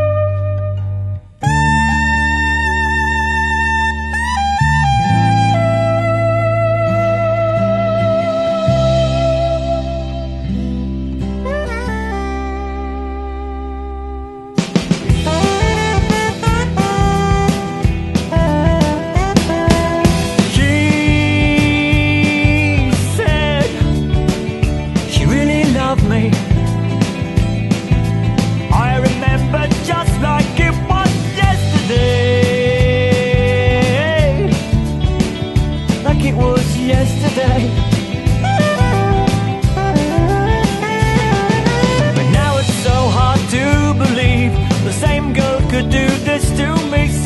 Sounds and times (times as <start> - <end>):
Music: 0.0 - 47.2.